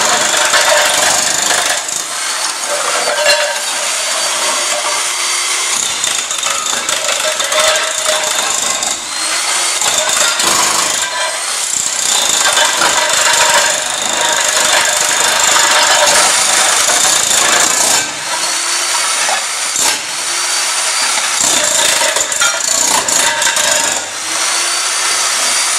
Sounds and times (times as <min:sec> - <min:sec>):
Power tool: 0:00.0 - 0:25.7.